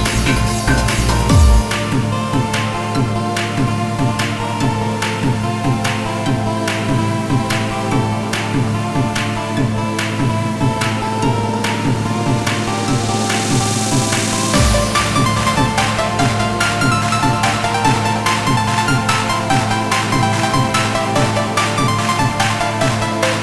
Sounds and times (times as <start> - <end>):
Techno: 0.0 - 23.4.